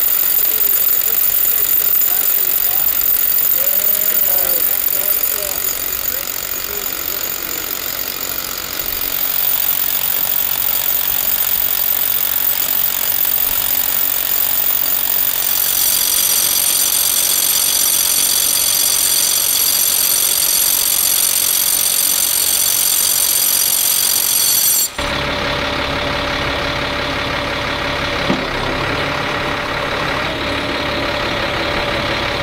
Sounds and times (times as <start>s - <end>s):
Jackhammer: 0.0s - 32.4s
Outside, urban or manmade: 0.0s - 32.4s.